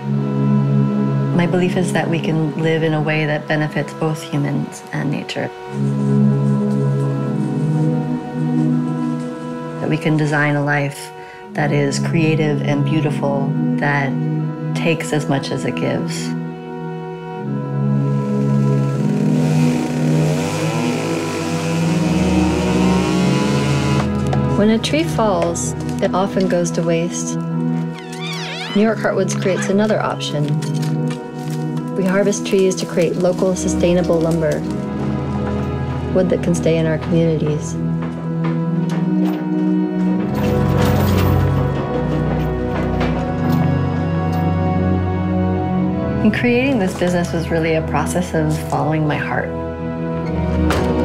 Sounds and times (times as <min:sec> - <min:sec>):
Music: 0:00.0 - 0:51.0
Speech: 0:01.4 - 0:05.5, 0:09.8 - 0:14.2, 0:14.8 - 0:16.4, 0:24.6 - 0:27.4, 0:28.7 - 0:30.7, 0:32.0 - 0:34.7, 0:36.1 - 0:37.8, 0:46.2 - 0:49.6.